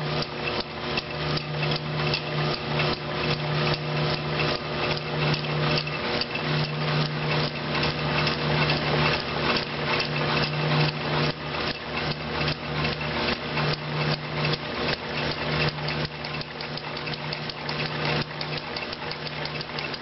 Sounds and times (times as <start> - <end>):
Engine: 0.0 - 20.0.